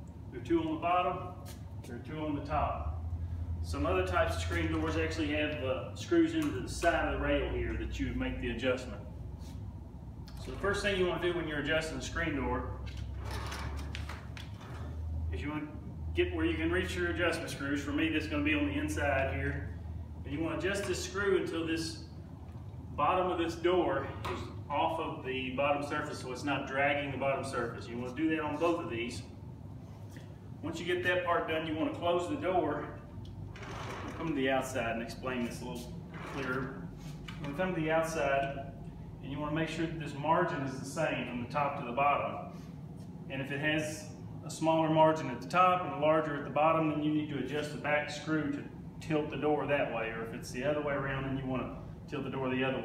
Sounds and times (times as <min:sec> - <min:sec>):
Speech: 0:00.3 - 0:03.0, 0:03.6 - 0:09.1, 0:10.4 - 0:12.8, 0:15.3 - 0:22.1, 0:23.0 - 0:29.4, 0:30.6 - 0:33.1, 0:34.0 - 0:36.8, 0:37.4 - 0:42.5, 0:43.3 - 0:52.8.